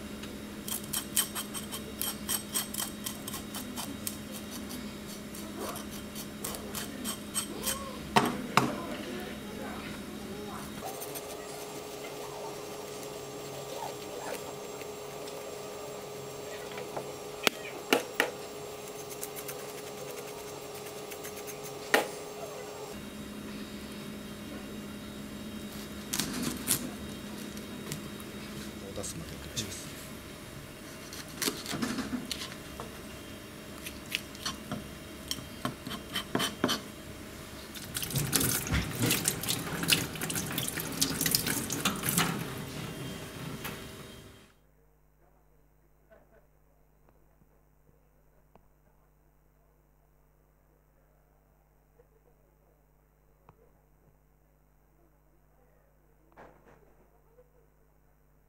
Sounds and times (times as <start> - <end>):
Speech: 6.5 - 11.7, 28.8 - 30.0.